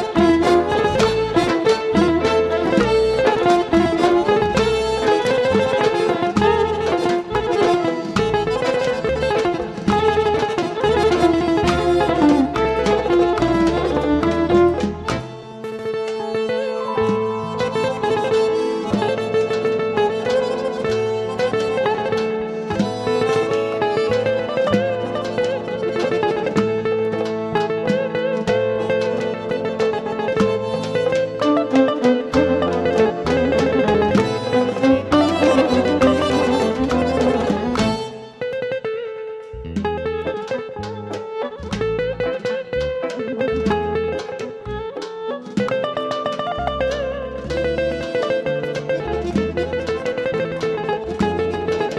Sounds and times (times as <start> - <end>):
Music: 0.0 - 51.9.